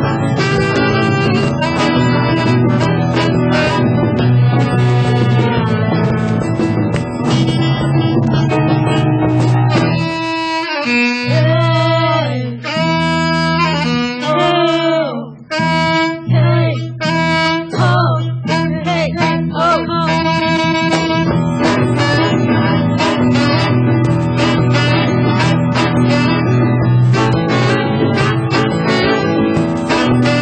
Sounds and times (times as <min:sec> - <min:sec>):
Inside, large room or hall: 0:00.0 - 0:30.4
Piano: 0:00.0 - 0:30.4
Singing: 0:11.3 - 0:12.9, 0:16.1 - 0:20.4.